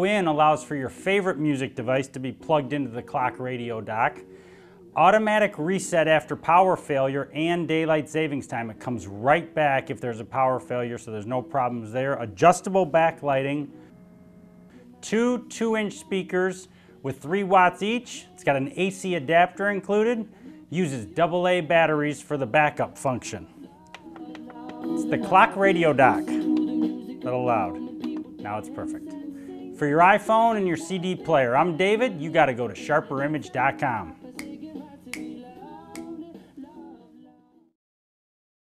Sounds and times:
Speech: 0:00.0 - 0:04.2, 0:05.0 - 0:13.7, 0:15.0 - 0:23.5, 0:25.0 - 0:26.4, 0:27.3 - 0:27.8, 0:28.4 - 0:29.1, 0:29.8 - 0:34.2
Music: 0:00.0 - 0:37.8.

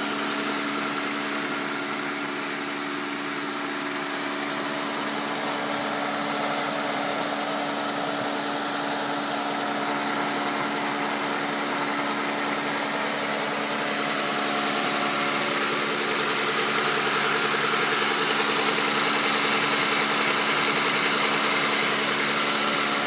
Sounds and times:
Idling: 0:00.0 - 0:23.0
Medium engine (mid frequency): 0:00.0 - 0:23.0
Vehicle: 0:00.0 - 0:23.0.

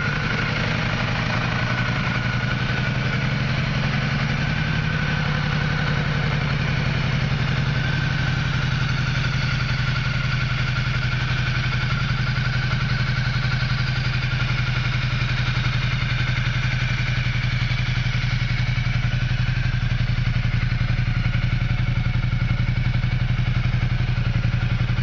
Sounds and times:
Idling: 0:00.0 - 0:25.0
Motorcycle: 0:00.0 - 0:25.0.

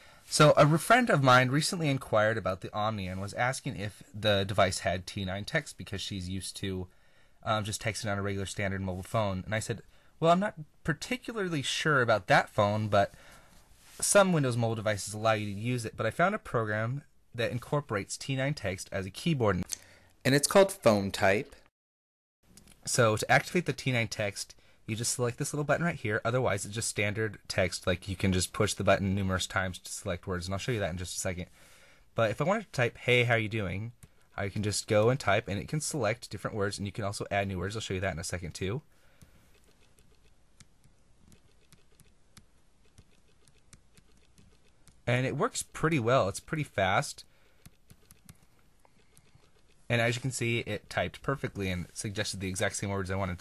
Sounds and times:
Inside, small room: 0:00.0 - 0:21.7, 0:22.4 - 0:53.4
Speech: 0:00.3 - 0:13.2, 0:14.0 - 0:21.6, 0:22.9 - 0:31.5, 0:32.2 - 0:38.9, 0:45.1 - 0:47.3, 0:49.9 - 0:53.4.

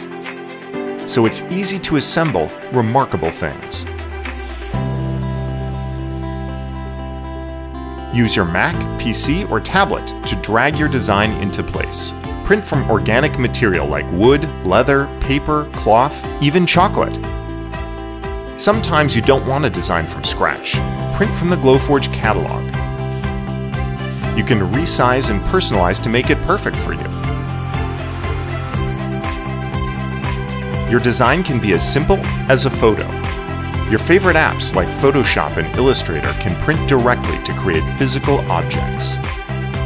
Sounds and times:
Music: 0:00.0 - 0:39.8
Speech: 0:01.1 - 0:03.9, 0:08.1 - 0:17.2, 0:18.6 - 0:22.7, 0:24.4 - 0:27.2, 0:30.9 - 0:33.2, 0:33.9 - 0:39.3.

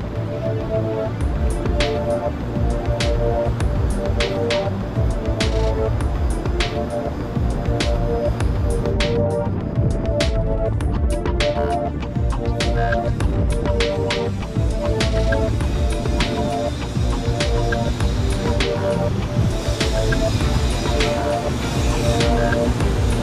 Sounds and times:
Music: 0:00.0 - 0:23.2.

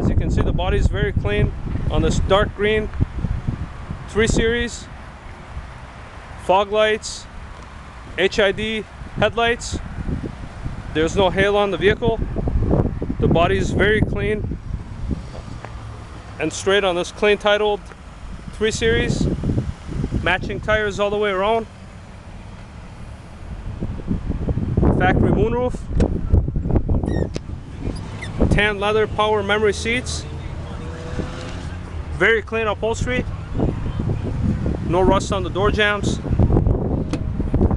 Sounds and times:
Speech: 0:00.0 - 0:02.9, 0:04.1 - 0:04.9, 0:06.5 - 0:07.3, 0:08.2 - 0:09.8, 0:11.0 - 0:12.2, 0:13.2 - 0:14.4, 0:16.4 - 0:17.8, 0:18.6 - 0:19.3, 0:20.2 - 0:21.7, 0:25.0 - 0:25.8, 0:28.5 - 0:30.8, 0:32.2 - 0:33.4, 0:34.9 - 0:36.2
Car: 0:00.0 - 0:37.7.

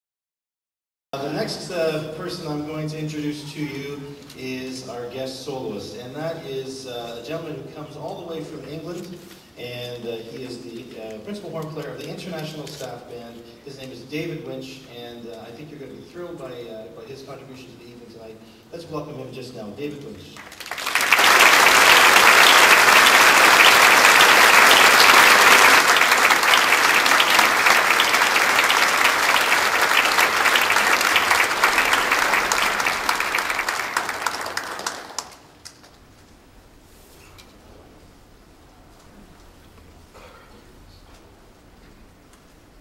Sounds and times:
Applause: 0:20.4 - 0:36.0.

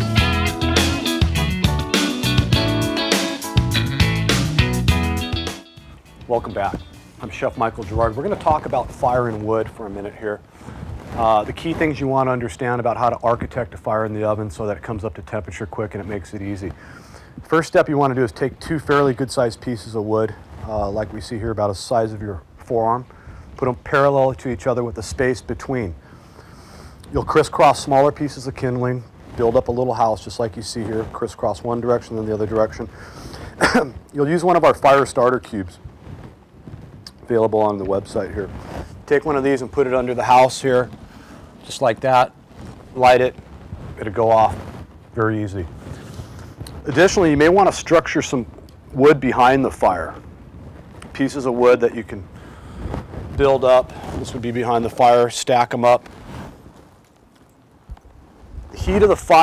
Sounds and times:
Speech: 0:06.3 - 0:10.4, 0:11.1 - 0:16.8, 0:17.4 - 0:26.0, 0:27.1 - 0:32.9, 0:33.6 - 0:35.8, 0:37.1 - 0:41.0, 0:41.6 - 0:42.3, 0:43.0 - 0:43.4, 0:44.0 - 0:44.6, 0:45.2 - 0:45.7, 0:46.8 - 0:50.2, 0:51.1 - 0:52.3, 0:53.3 - 0:56.1, 0:58.7 - 0:59.4.

